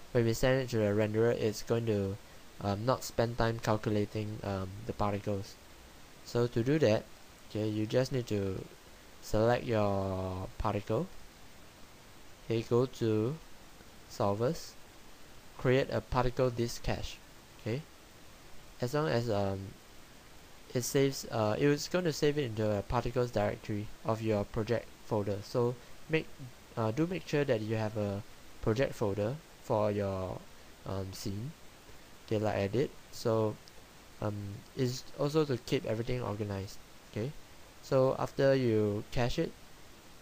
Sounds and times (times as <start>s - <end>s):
Speech: 0.1s - 5.6s, 6.2s - 11.1s, 12.5s - 13.4s, 14.1s - 14.8s, 15.6s - 17.9s, 18.8s - 19.8s, 20.7s - 31.6s, 32.3s - 33.6s, 34.2s - 39.6s.